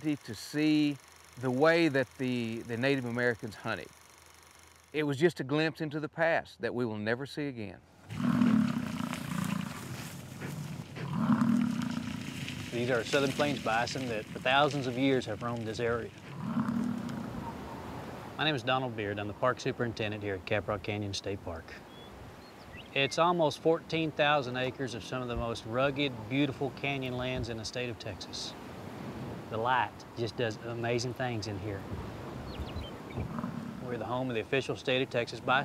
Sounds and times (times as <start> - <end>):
Wild animals: 8.1 - 18.5, 33.1 - 34.3.